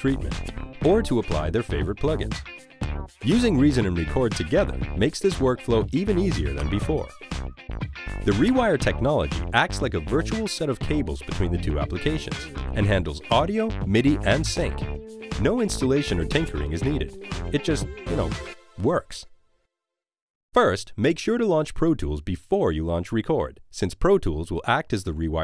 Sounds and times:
Speech: 0.0 - 2.4, 3.2 - 7.2, 8.3 - 14.8, 15.4 - 19.3, 20.6 - 25.4
Music: 0.0 - 19.7.

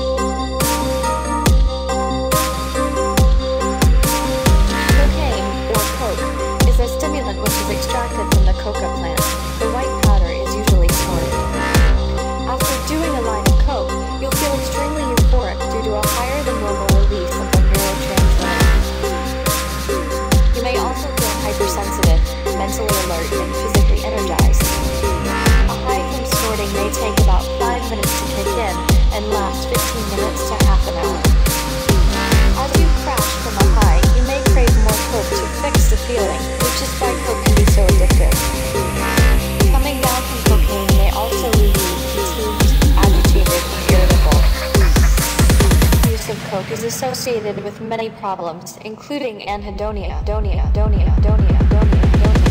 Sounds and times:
Dubstep: 0.0 - 48.5, 50.9 - 52.5
Speech: 4.8 - 11.3, 12.5 - 18.8, 20.6 - 24.8, 25.7 - 31.3, 32.5 - 38.5, 39.6 - 44.6, 46.1 - 52.5.

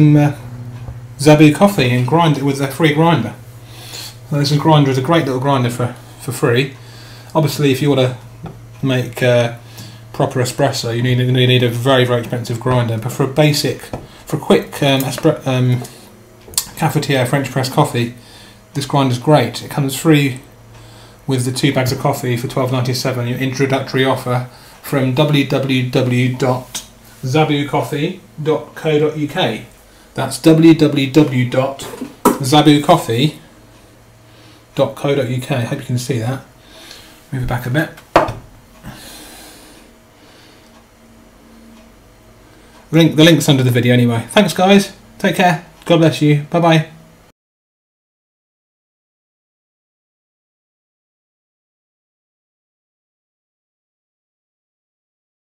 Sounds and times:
Speech: 0.0 - 0.4, 1.2 - 3.4, 4.3 - 8.2, 8.8 - 15.9, 16.6 - 18.2, 18.8 - 20.5, 21.3 - 33.5, 34.8 - 36.5, 37.3 - 38.0, 42.9 - 47.0.

